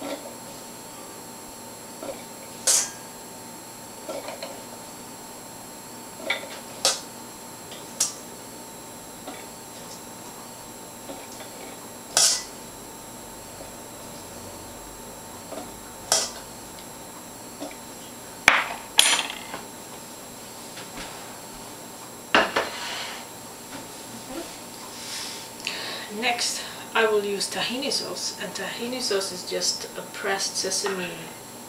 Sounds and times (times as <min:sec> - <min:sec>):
Speech: 0:26.1 - 0:31.4.